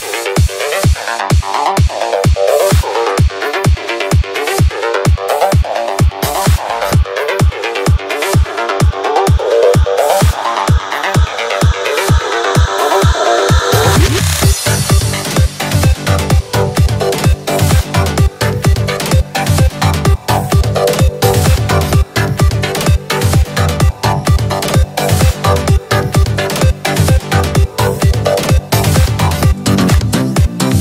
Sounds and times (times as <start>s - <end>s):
Techno: 0.0s - 30.8s.